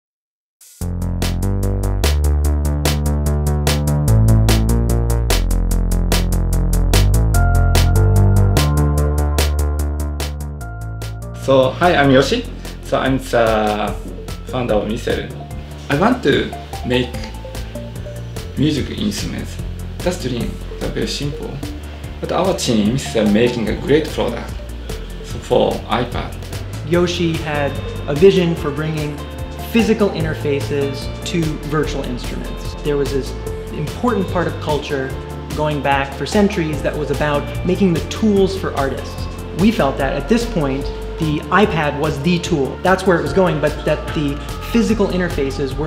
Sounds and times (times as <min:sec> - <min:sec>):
Background music: 0:00.6 - 0:45.8
Speech: 0:11.4 - 0:17.4, 0:18.6 - 0:24.6, 0:25.3 - 0:45.8.